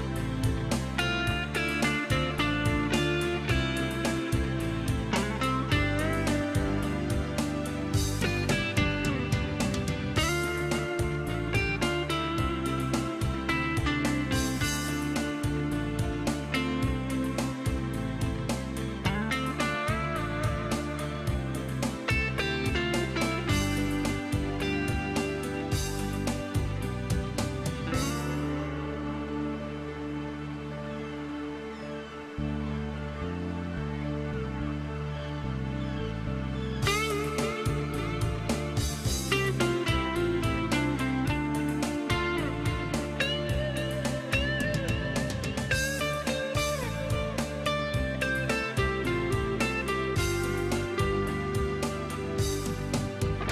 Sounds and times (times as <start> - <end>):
Music: 0.0 - 53.5.